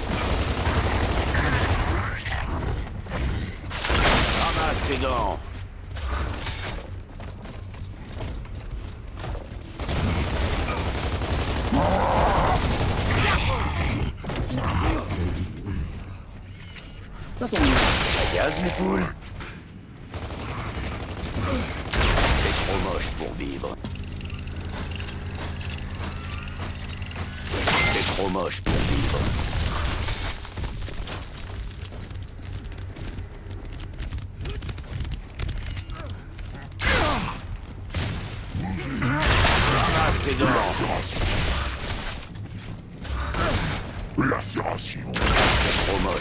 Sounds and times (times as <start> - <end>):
Speech: 4.4 - 5.4, 17.4 - 19.2, 22.4 - 23.8, 27.6 - 29.3, 38.6 - 41.2, 44.2 - 45.2, 45.8 - 46.2.